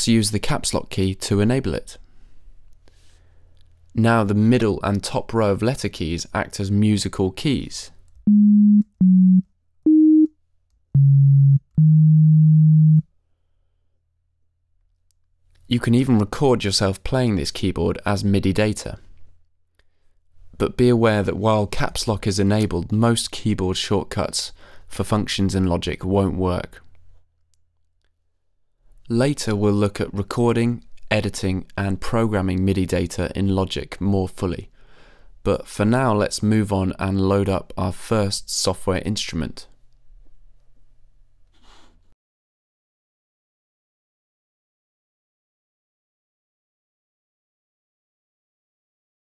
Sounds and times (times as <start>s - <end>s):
Speech: 0.0s - 2.0s, 3.9s - 8.0s, 15.7s - 19.1s, 20.6s - 26.9s, 29.0s - 34.7s, 35.4s - 39.8s.